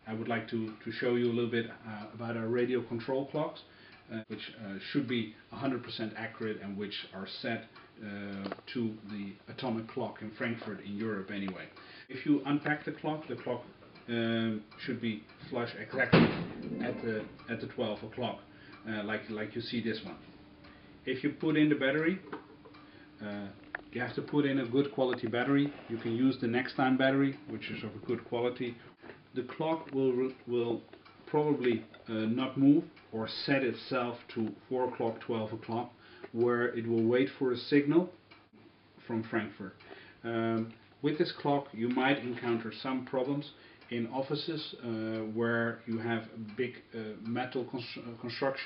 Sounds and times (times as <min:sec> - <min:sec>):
Speech: 0:00.0 - 0:20.3, 0:21.0 - 0:22.4, 0:23.2 - 0:38.2, 0:39.0 - 0:48.6.